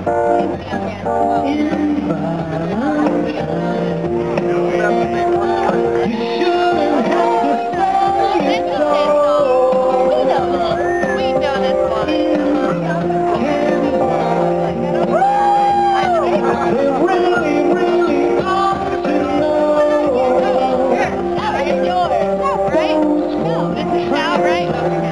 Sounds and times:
Music: 0.0s - 25.1s
Speech: 0.4s - 3.8s, 4.4s - 25.1s
Whoop: 15.1s - 16.3s.

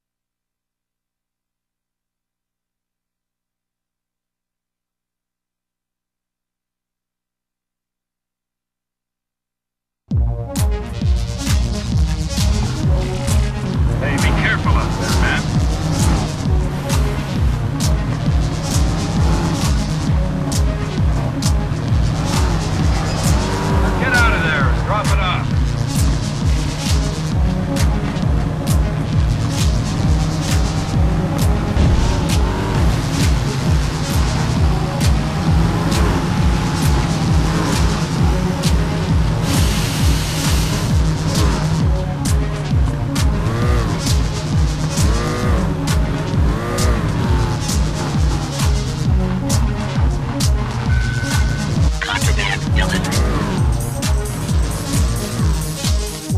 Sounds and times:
Music: 10.1s - 56.3s
Speech: 14.0s - 15.5s, 24.0s - 25.5s, 52.0s - 53.3s.

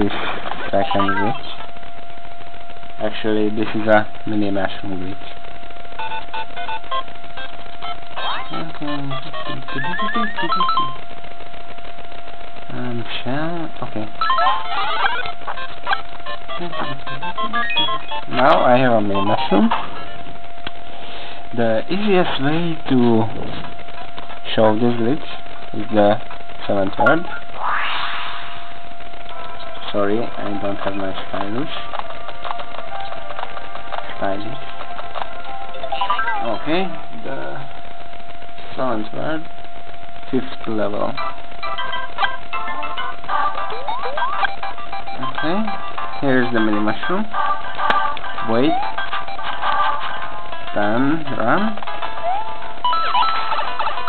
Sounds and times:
Speech: 0.0s - 1.6s, 3.0s - 5.4s, 8.5s - 10.7s, 12.7s - 14.1s, 18.3s - 19.7s, 21.6s - 23.7s, 24.5s - 27.3s, 29.8s - 31.9s, 34.2s - 34.6s, 36.4s - 37.6s, 38.7s - 39.5s, 40.3s - 41.2s, 45.2s - 47.3s, 48.5s - 48.8s, 50.8s - 51.8s.

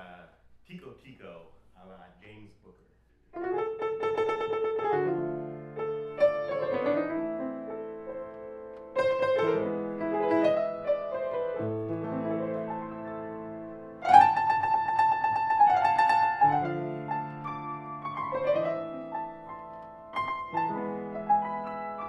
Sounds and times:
Piano: 3.3s - 22.0s.

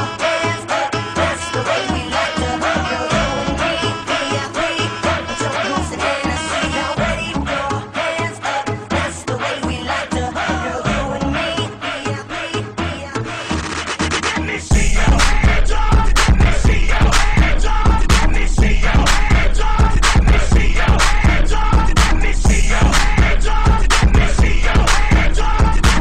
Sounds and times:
Music: 0.0s - 26.0s.

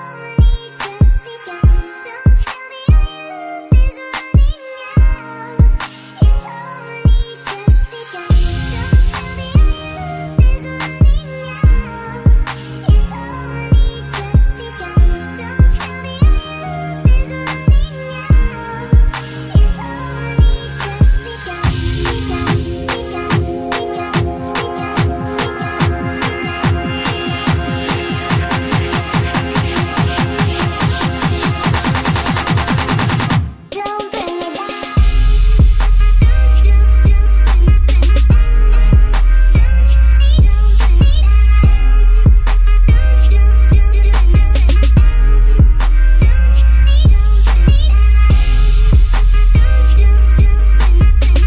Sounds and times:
Dubstep: 0.0s - 51.4s.

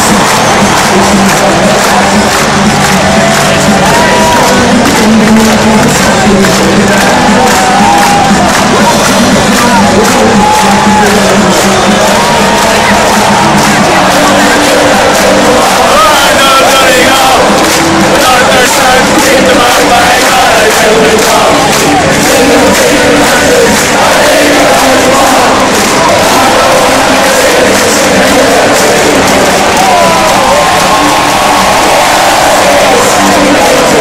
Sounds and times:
Male singing: 0.0s - 34.0s
Music: 0.0s - 34.0s.

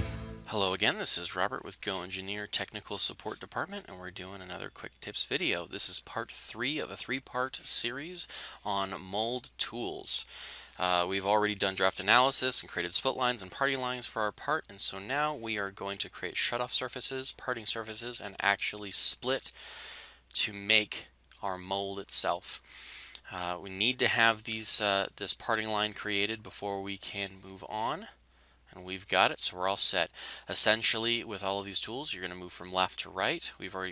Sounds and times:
Speech: 0.5s - 19.6s, 20.3s - 22.6s, 23.2s - 33.9s.

